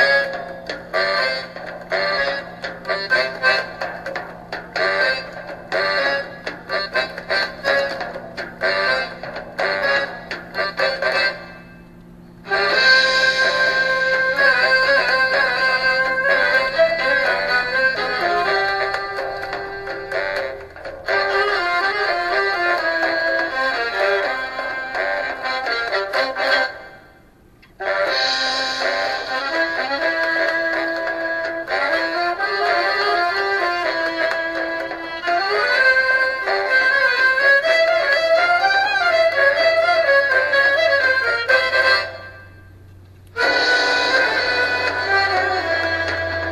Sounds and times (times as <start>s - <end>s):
Music: 0.0s - 46.5s.